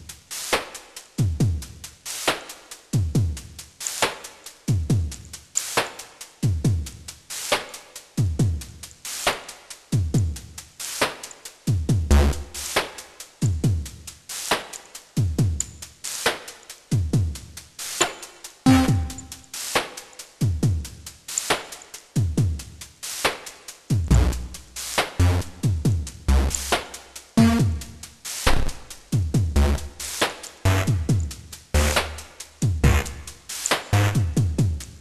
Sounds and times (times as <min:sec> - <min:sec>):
Dubstep: 0:00.0 - 0:35.0.